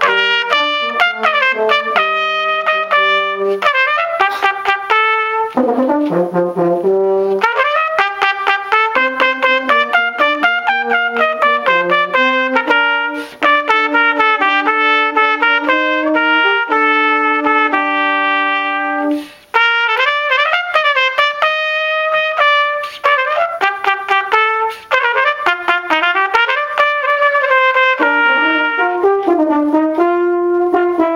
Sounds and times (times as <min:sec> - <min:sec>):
French horn: 0:00.0 - 0:31.1
Trumpet: 0:00.0 - 0:31.1.